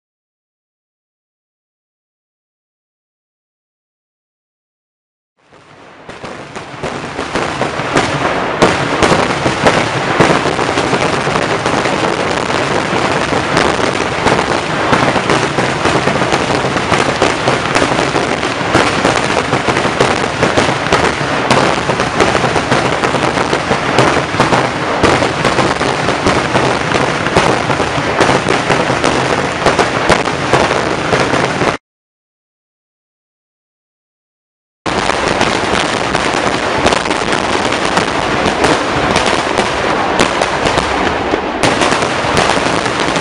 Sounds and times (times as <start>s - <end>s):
Fireworks: 5.4s - 31.8s, 34.9s - 43.2s.